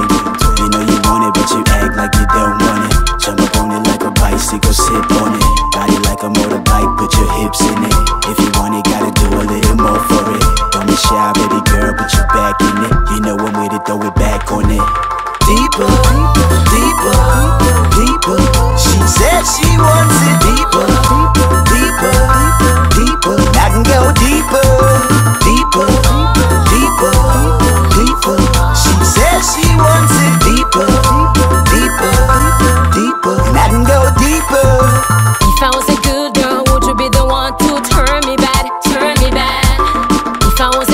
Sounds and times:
Music: 0:00.0 - 0:40.9.

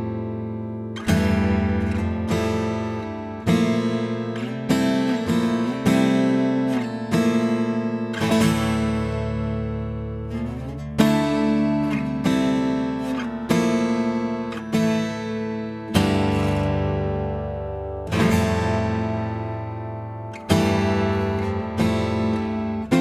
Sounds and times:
Music: 0:00.0 - 0:23.0.

